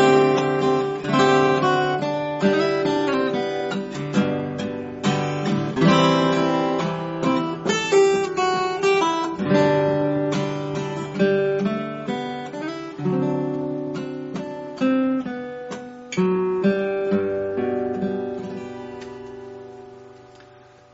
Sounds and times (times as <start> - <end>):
Acoustic guitar: 0.0 - 20.9
Strum: 0.0 - 20.9.